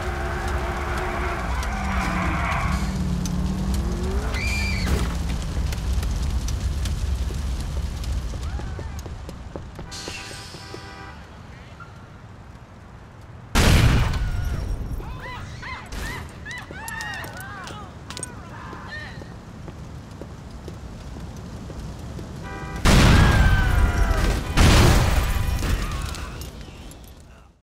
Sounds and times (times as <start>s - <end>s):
Explosion: 3.7s - 9.0s, 13.6s - 15.1s, 22.8s - 26.2s.